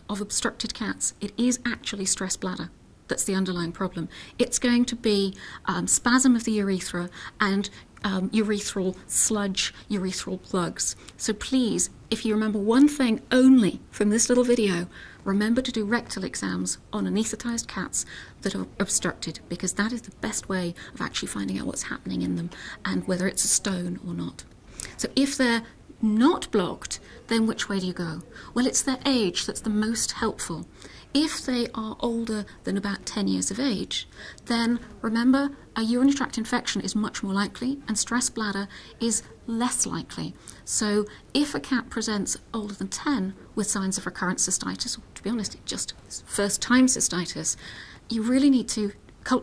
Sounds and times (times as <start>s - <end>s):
Speech: 0.0s - 49.4s.